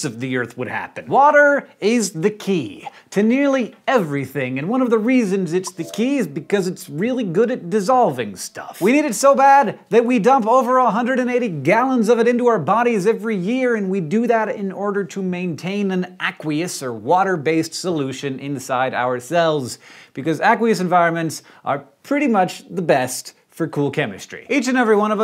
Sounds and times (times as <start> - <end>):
Speech: 0.0 - 25.2.